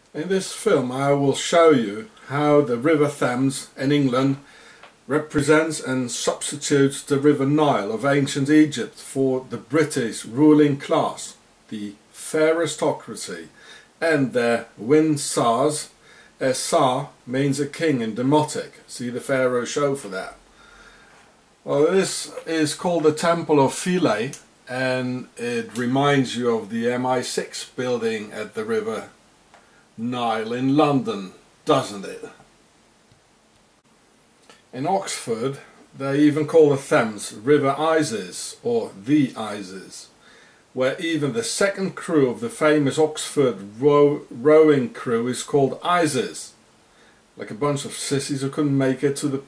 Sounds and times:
Speech: 0.1 - 4.5, 5.1 - 20.5, 21.6 - 29.2, 30.0 - 32.5, 34.7 - 40.1, 40.8 - 46.6, 47.4 - 49.4.

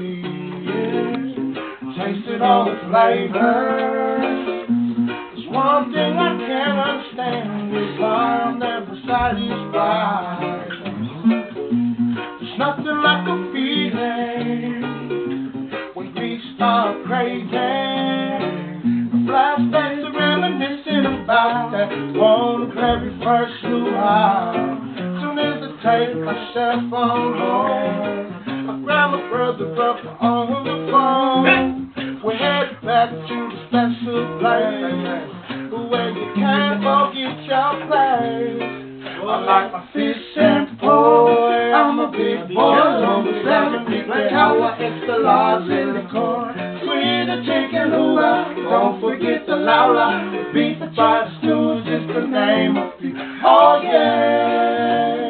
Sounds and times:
Music: 0.0 - 55.2.

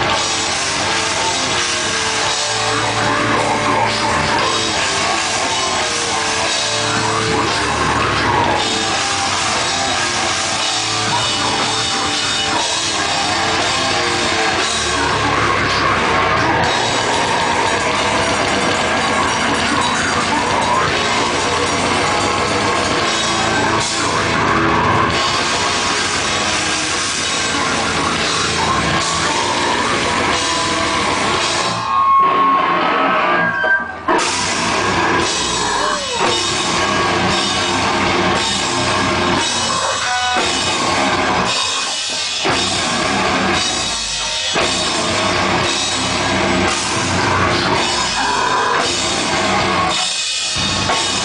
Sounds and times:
Heavy metal: 0.0 - 51.2.

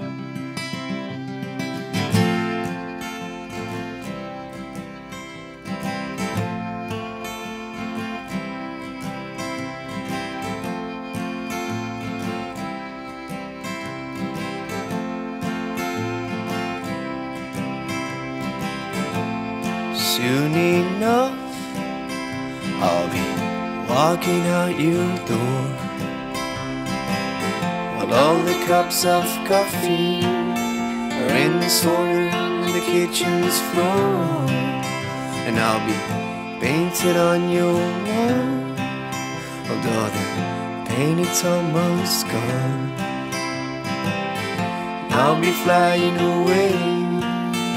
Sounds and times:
Music: 0.0 - 47.7.

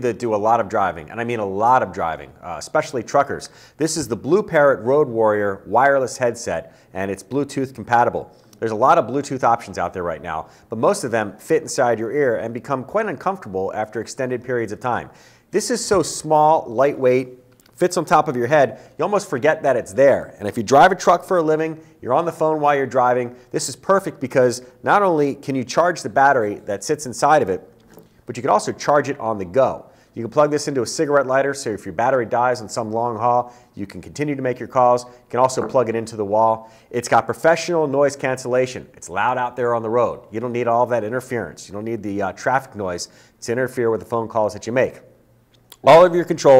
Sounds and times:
Speech: 0.0 - 27.7, 28.3 - 45.1, 45.8 - 46.5.

